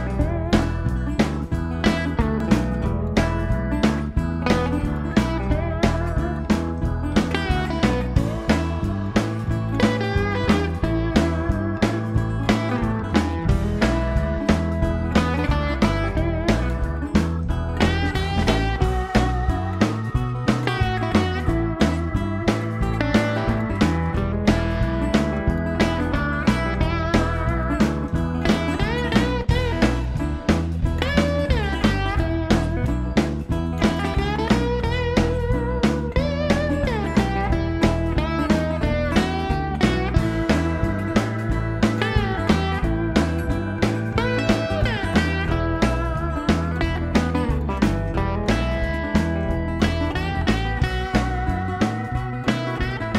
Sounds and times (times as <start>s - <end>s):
Strum: 0.0s - 53.1s.